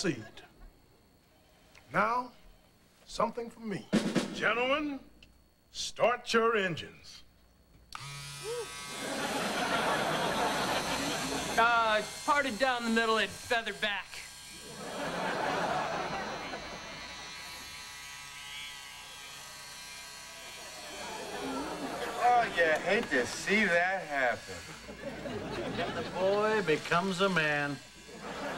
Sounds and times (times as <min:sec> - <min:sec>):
Speech: 0:03.1 - 0:05.1, 0:11.6 - 0:14.3, 0:22.1 - 0:24.6, 0:26.0 - 0:27.8
Electric shaver, electric razor: 0:07.9 - 0:28.5.